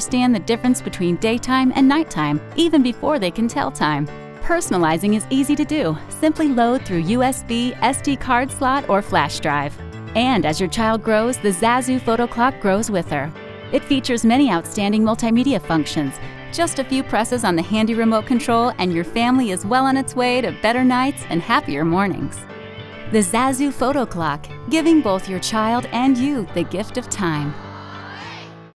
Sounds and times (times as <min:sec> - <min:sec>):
Speech: 0:00.0 - 0:22.4, 0:23.1 - 0:27.6
Music: 0:00.0 - 0:28.7.